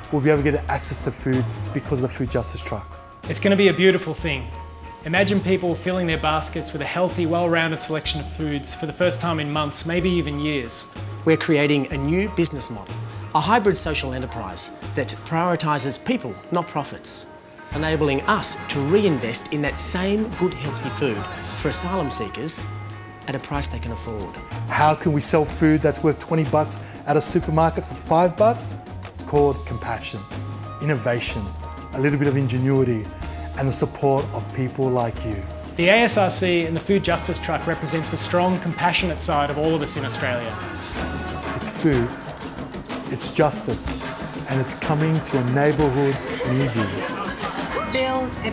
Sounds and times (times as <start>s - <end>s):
Music: 0.0s - 48.5s
Speech: 0.1s - 22.6s, 23.3s - 40.6s, 41.6s - 42.1s, 43.1s - 47.1s, 47.8s - 48.5s.